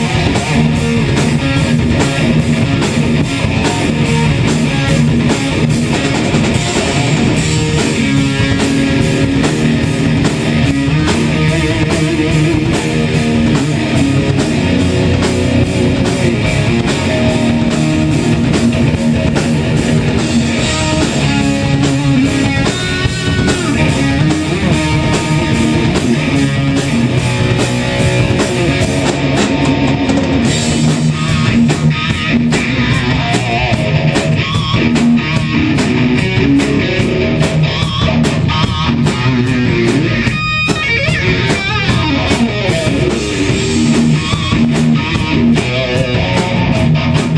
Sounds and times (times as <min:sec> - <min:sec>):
Electric guitar: 0:00.0 - 0:47.3.